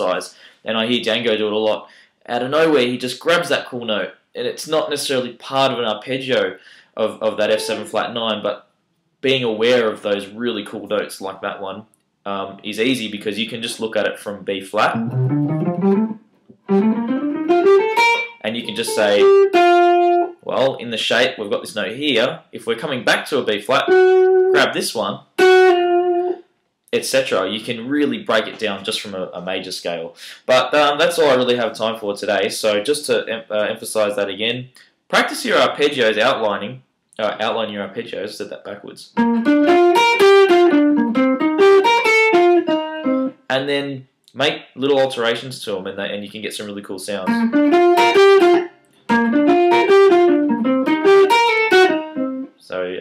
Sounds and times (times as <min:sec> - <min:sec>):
Speech: 0:00.0 - 0:08.6, 0:09.2 - 0:15.0, 0:18.4 - 0:19.3, 0:20.4 - 0:24.0, 0:24.6 - 0:25.3, 0:26.9 - 0:39.2, 0:43.5 - 0:47.4, 0:52.6 - 0:53.0
Tapping (guitar technique): 0:14.9 - 0:20.3, 0:39.2 - 0:43.3, 0:47.3 - 0:52.5.